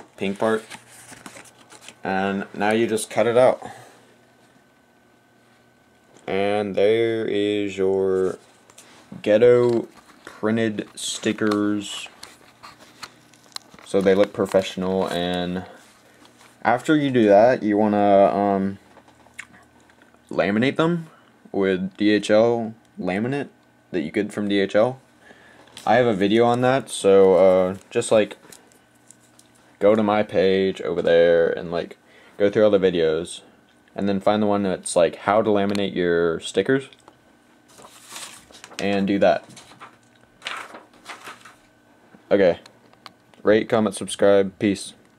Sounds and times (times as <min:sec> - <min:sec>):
Speech: 0:00.0 - 0:00.7, 0:02.0 - 0:03.7, 0:06.3 - 0:08.4, 0:09.2 - 0:12.2, 0:13.9 - 0:15.8, 0:16.6 - 0:18.8, 0:20.3 - 0:25.0, 0:25.8 - 0:28.4, 0:29.8 - 0:37.0, 0:38.8 - 0:39.5, 0:42.3 - 0:42.7, 0:43.4 - 0:45.0.